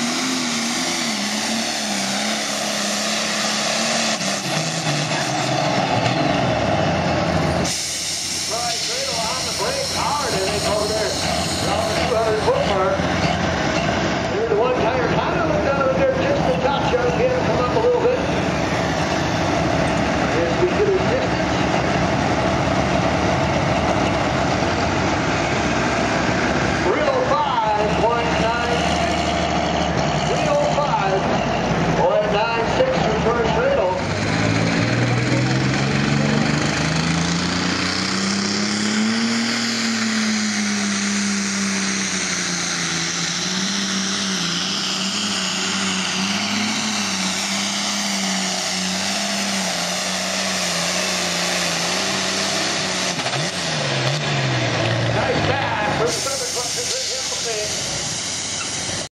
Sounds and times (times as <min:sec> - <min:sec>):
Outside, rural or natural: 0:00.0 - 0:59.1
Vehicle: 0:00.0 - 0:59.1
Speech: 0:08.5 - 0:13.0, 0:14.3 - 0:18.4, 0:20.3 - 0:21.5, 0:26.8 - 0:28.9, 0:30.3 - 0:31.3, 0:32.0 - 0:34.1, 0:55.1 - 0:57.8.